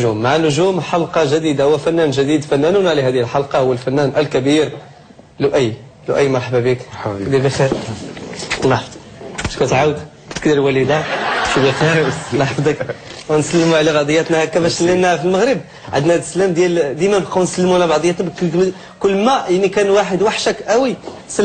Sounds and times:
Speech: 0:00.0 - 0:08.0, 0:08.6 - 0:21.4.

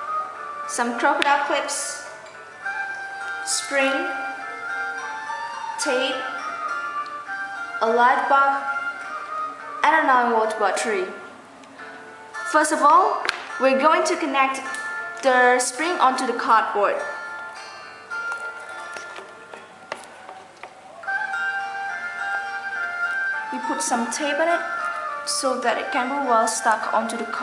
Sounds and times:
Music: 0:00.0 - 0:27.4
Speech: 0:00.7 - 0:02.1, 0:03.5 - 0:04.2, 0:05.8 - 0:06.4, 0:07.8 - 0:08.7, 0:09.8 - 0:11.2, 0:12.5 - 0:17.2, 0:23.6 - 0:24.7, 0:25.3 - 0:27.4.

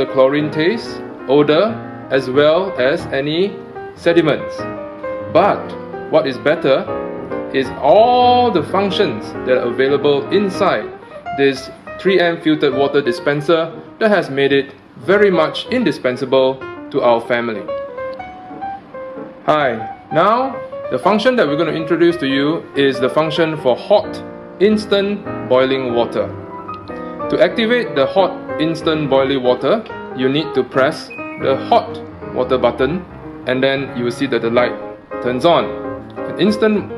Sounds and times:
Speech: 0:00.0 - 0:04.6, 0:05.3 - 0:06.9, 0:07.5 - 0:17.7, 0:19.5 - 0:26.3, 0:27.3 - 0:36.9
Music: 0:00.0 - 0:36.9.

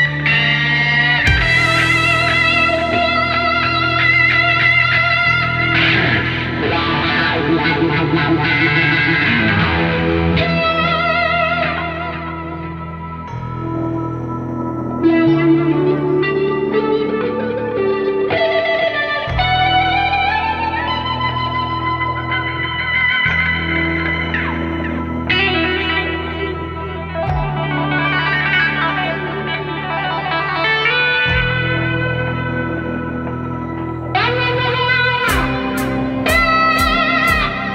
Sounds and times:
Electronic music: 0:00.0 - 0:37.7.

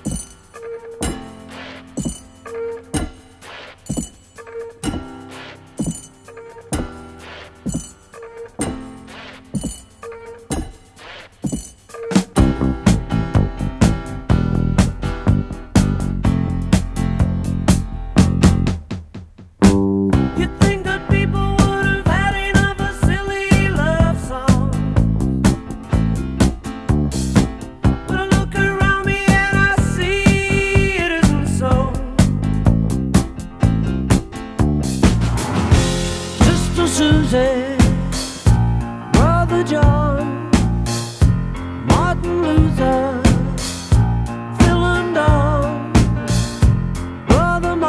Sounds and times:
Music: 0:00.0 - 0:47.8.

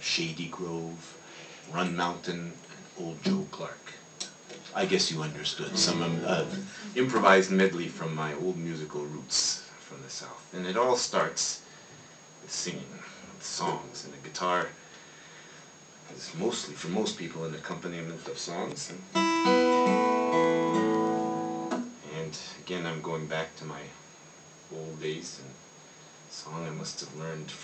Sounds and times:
Speech: 0:00.0 - 0:11.7, 0:12.4 - 0:14.8, 0:16.0 - 0:19.1, 0:22.0 - 0:24.0, 0:24.7 - 0:25.6, 0:26.3 - 0:27.6.

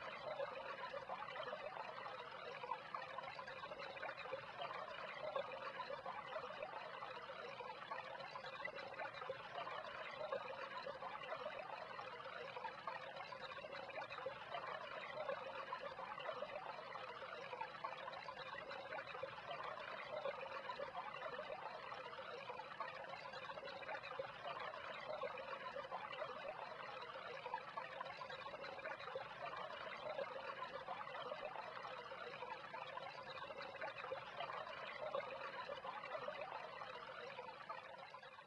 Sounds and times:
Pour: 0:00.0 - 0:38.4.

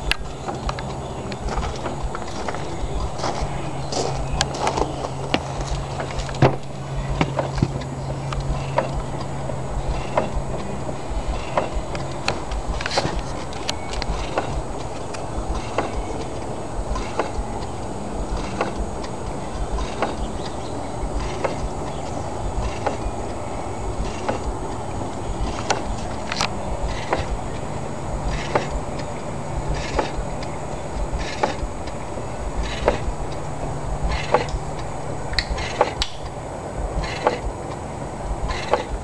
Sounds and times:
Engine: 0:00.0 - 0:39.0.

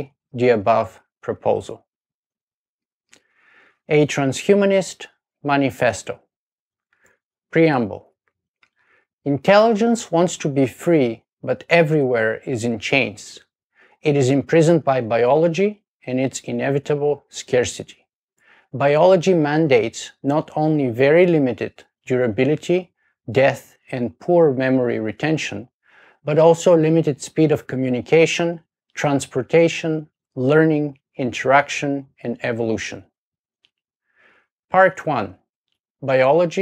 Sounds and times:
Speech: 0:00.0 - 0:01.9, 0:03.9 - 0:06.3, 0:07.5 - 0:08.1, 0:09.3 - 0:18.0, 0:18.8 - 0:33.1, 0:34.7 - 0:35.4, 0:36.0 - 0:36.6.

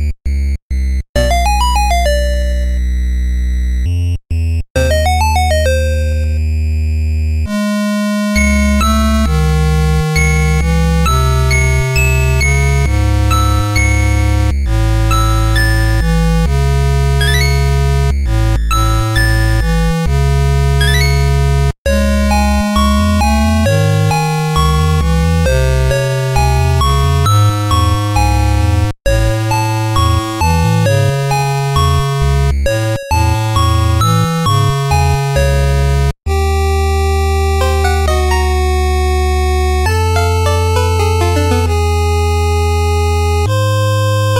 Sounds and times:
Music: 0:00.0 - 0:44.3.

